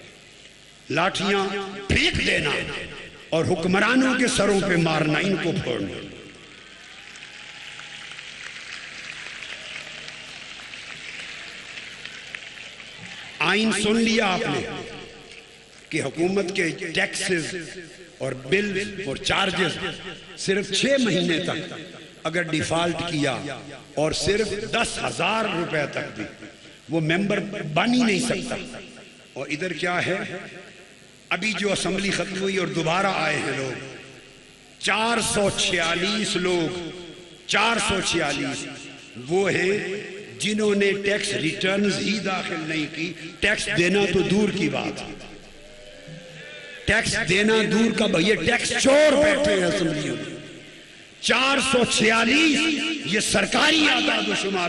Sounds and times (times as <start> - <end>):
Narration, monologue: 0.0 - 6.6, 13.4 - 45.6, 46.8 - 54.6
Male speech, man speaking: 0.9 - 2.8, 3.4 - 6.1, 13.4 - 14.9, 16.0 - 21.7, 22.3 - 26.3, 26.9 - 28.7, 29.4 - 30.4, 31.3 - 33.8, 34.8 - 36.9, 37.5 - 45.2, 46.9 - 50.4, 51.2 - 54.6.